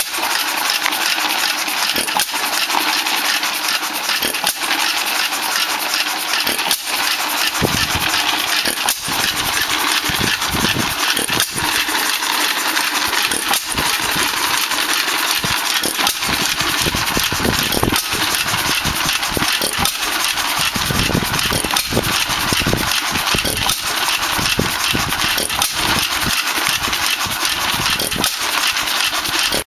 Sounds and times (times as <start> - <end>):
Idling: 0.0 - 29.6
Medium engine (mid frequency): 0.0 - 29.6.